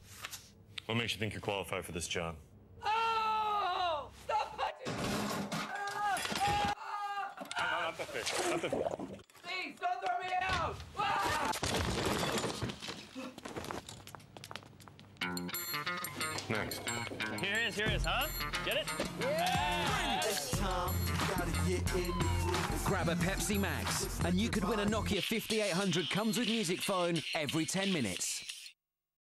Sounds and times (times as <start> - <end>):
Speech: 0.8 - 2.4, 9.4 - 11.5, 24.3 - 28.4
Music: 15.2 - 26.1.